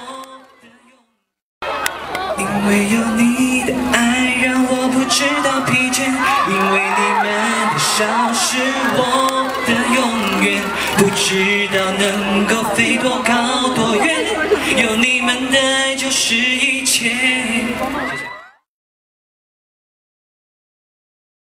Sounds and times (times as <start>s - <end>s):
Male singing: 0.0s - 1.2s, 2.4s - 18.2s.